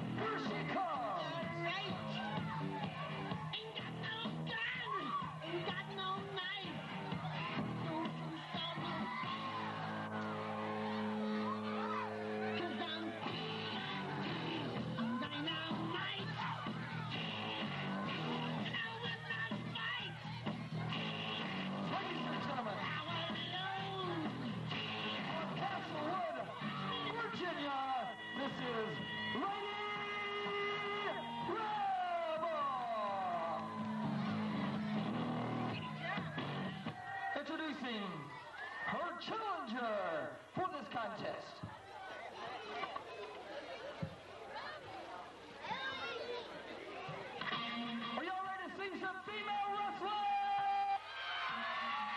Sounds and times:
Music: 0.0 - 37.4, 47.1 - 48.7.

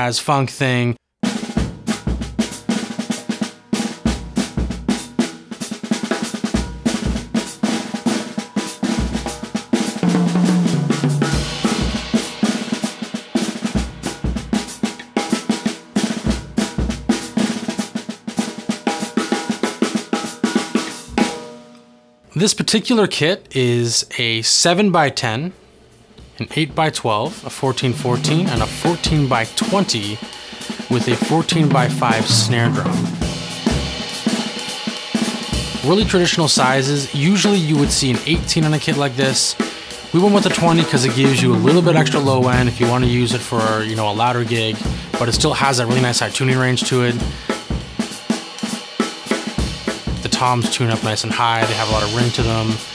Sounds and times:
Speech: 0.0 - 1.0, 22.3 - 25.6, 26.4 - 33.1, 35.8 - 47.4, 50.2 - 52.9
Drum: 1.2 - 21.5, 26.4 - 52.9
Drum kit: 1.2 - 21.7, 25.9 - 52.9.

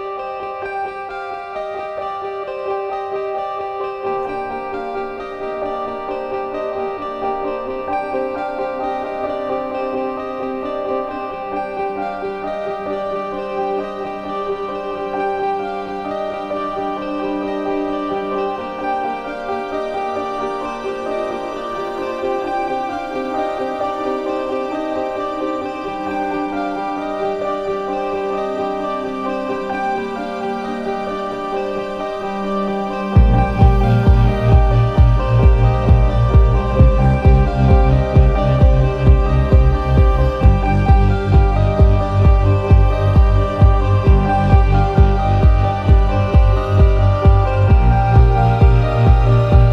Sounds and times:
Keyboard (musical): 0.0 - 49.7.

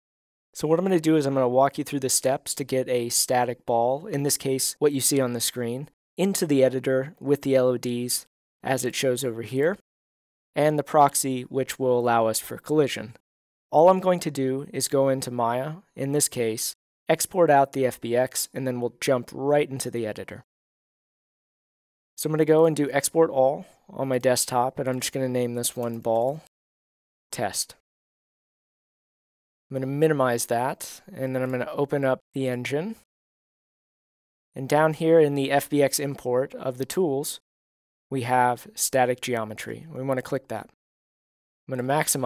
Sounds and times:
Speech: 0.6 - 9.8, 10.6 - 13.2, 13.8 - 20.5, 22.2 - 26.5, 27.3 - 27.8, 29.7 - 33.1, 34.6 - 37.4, 38.1 - 40.8, 41.7 - 42.2.

